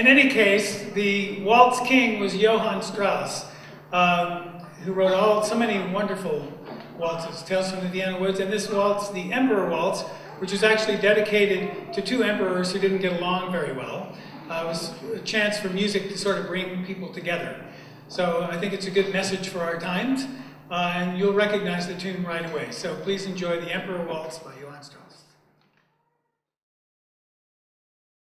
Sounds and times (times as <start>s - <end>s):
Speech: 0.0s - 25.3s.